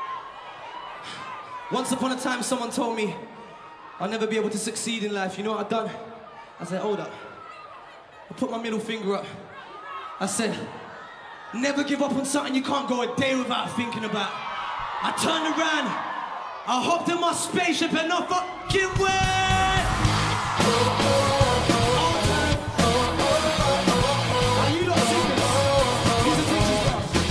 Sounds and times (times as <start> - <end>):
Speech: 8.3 - 9.4, 11.6 - 14.3, 15.0 - 16.0, 16.7 - 19.8
Music: 18.9 - 27.3.